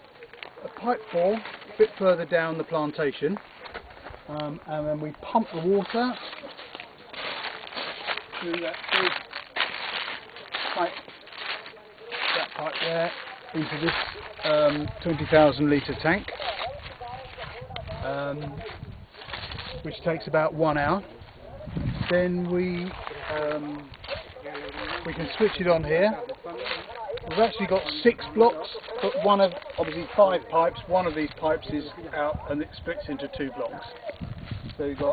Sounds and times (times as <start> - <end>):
Speech: 10.6 - 18.8, 19.6 - 34.2, 34.8 - 35.1.